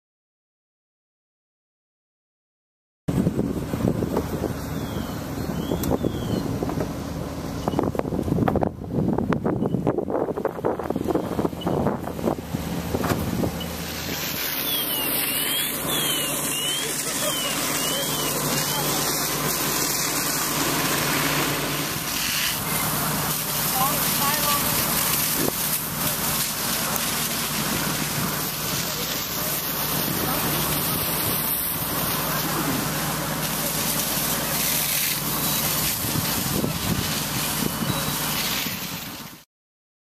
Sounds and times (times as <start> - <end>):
Wind noise (microphone): 3.1 - 7.0, 7.6 - 13.6, 35.9 - 39.3
Outside, rural or natural: 3.1 - 39.5.